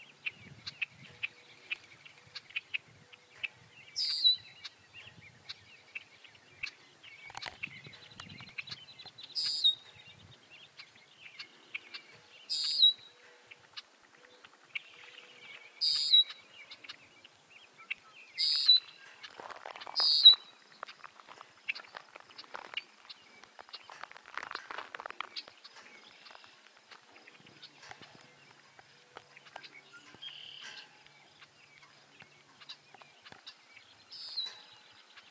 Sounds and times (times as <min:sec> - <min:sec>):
Bird: 0:00.0 - 0:35.3.